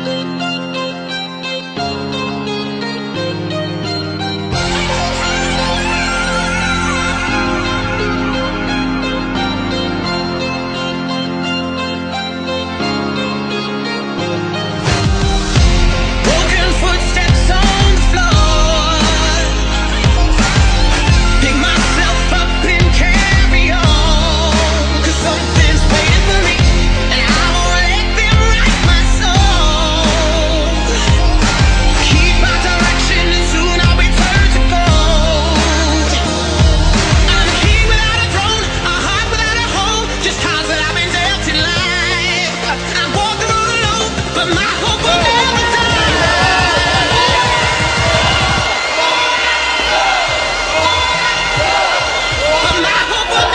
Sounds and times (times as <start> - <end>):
Music: 0.0 - 53.5.